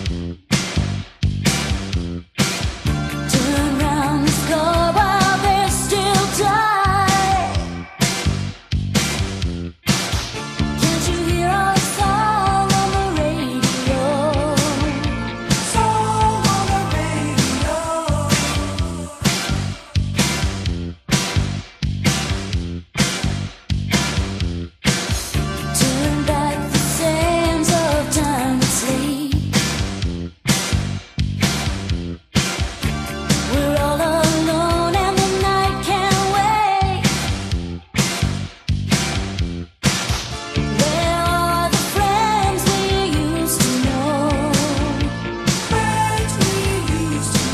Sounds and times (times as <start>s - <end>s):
Music: 0.0s - 47.5s.